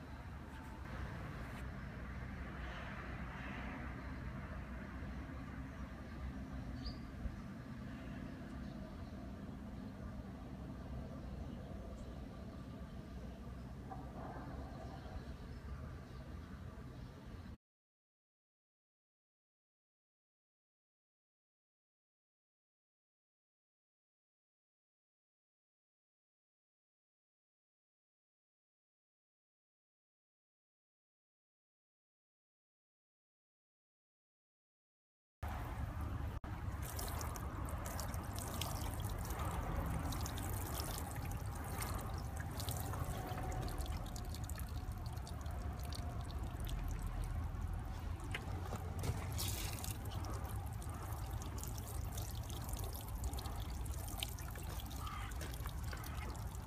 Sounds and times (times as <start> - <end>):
Trickle, dribble: 35.5 - 56.6.